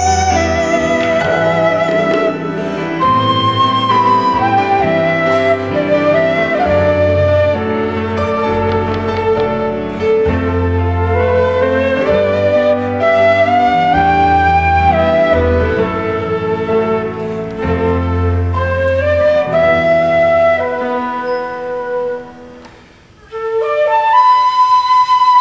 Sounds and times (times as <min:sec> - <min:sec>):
Flute: 0:00.0 - 0:25.4
Piano: 0:00.0 - 0:25.4.